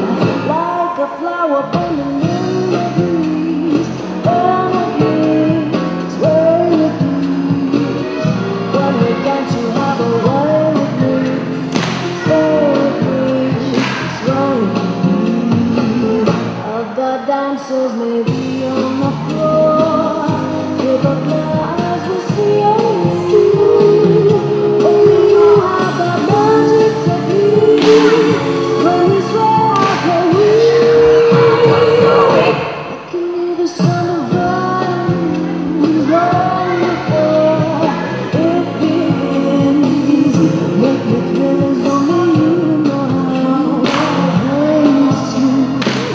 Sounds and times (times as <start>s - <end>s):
Music: 0.0s - 46.1s.